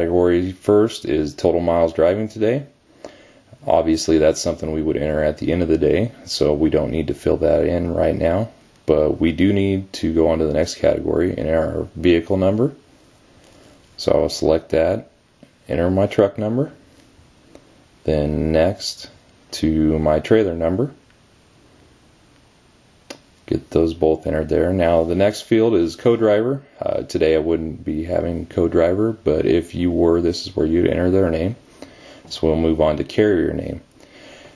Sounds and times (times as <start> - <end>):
Speech: 0.0 - 2.8, 3.6 - 12.8, 14.0 - 16.8, 18.0 - 21.0, 23.4 - 31.6, 32.3 - 33.9.